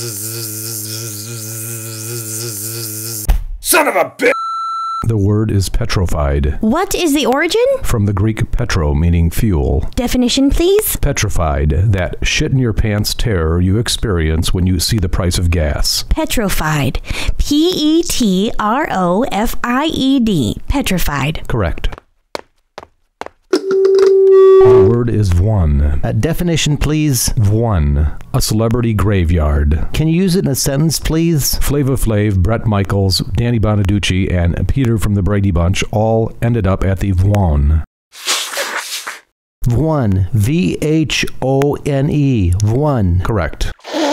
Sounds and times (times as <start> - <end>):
Speech: 3.6 - 4.4, 5.0 - 22.0, 24.6 - 37.9, 39.6 - 43.8.